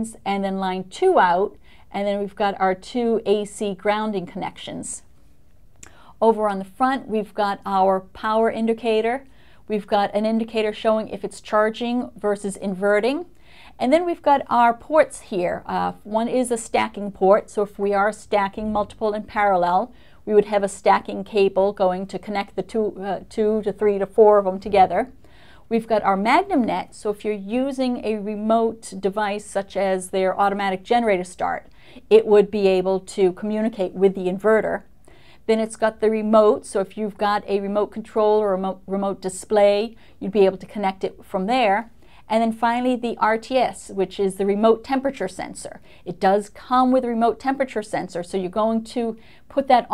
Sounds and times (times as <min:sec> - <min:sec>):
Speech: 0:00.0 - 0:05.0, 0:06.2 - 0:34.9, 0:35.5 - 0:49.9.